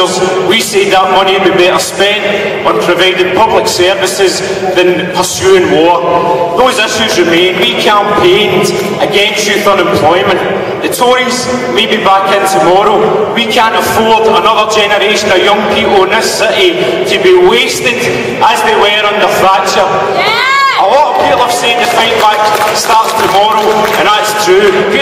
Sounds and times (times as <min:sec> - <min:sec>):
Narration, monologue: 0:00.0 - 0:20.2, 0:20.8 - 0:25.0
Male speech, man speaking: 0:00.0 - 0:25.0.